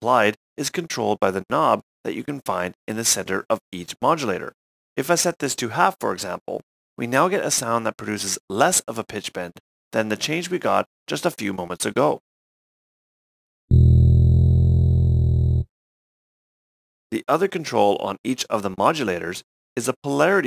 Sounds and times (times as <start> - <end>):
Speech: 0.0 - 12.2, 17.1 - 20.4.